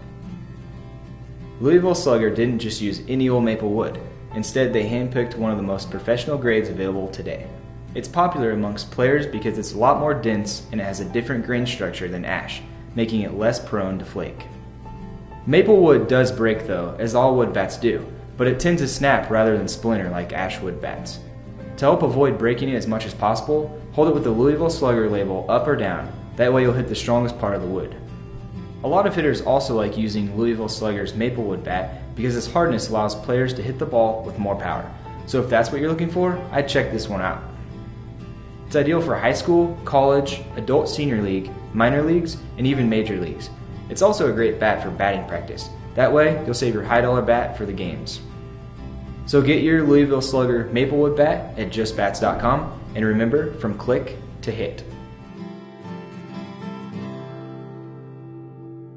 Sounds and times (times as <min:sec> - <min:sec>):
Music: 0:00.0 - 0:58.9
Speech: 0:01.6 - 0:14.5, 0:15.5 - 0:28.1, 0:28.8 - 0:37.5, 0:38.7 - 0:48.3, 0:49.3 - 0:55.0.